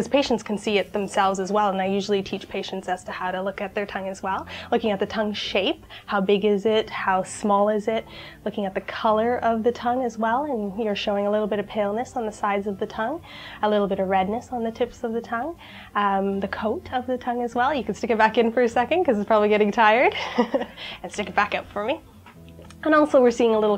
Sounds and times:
Speech: 0.0 - 20.2, 21.0 - 22.0, 22.8 - 23.7.

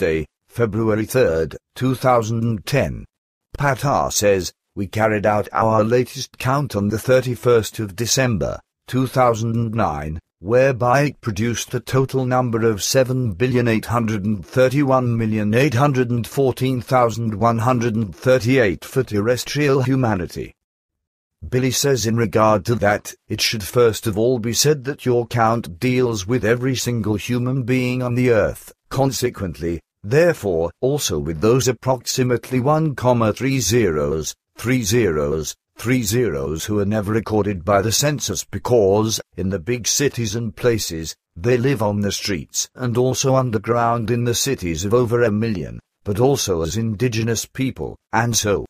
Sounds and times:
Speech: 0.0 - 20.6, 21.4 - 48.6.

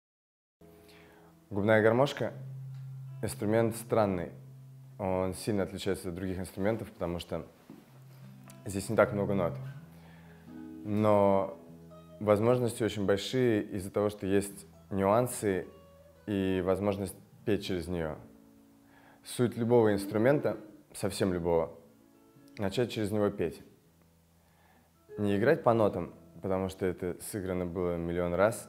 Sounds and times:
Music: 0.6 - 28.6
Speech: 1.5 - 2.4, 3.2 - 4.4, 5.0 - 7.5, 8.6 - 9.7, 10.8 - 11.6, 12.2 - 15.7, 16.3 - 18.3, 19.2 - 21.8, 22.6 - 23.7, 25.2 - 28.6.

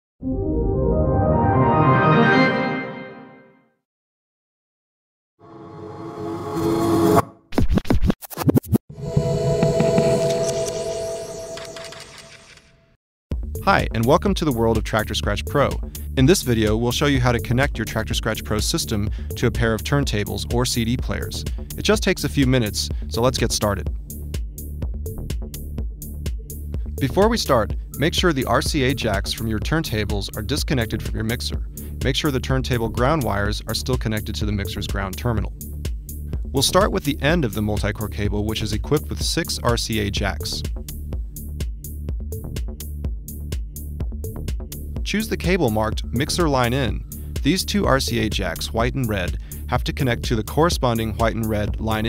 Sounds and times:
Music: 0.2 - 3.8, 13.3 - 52.0.

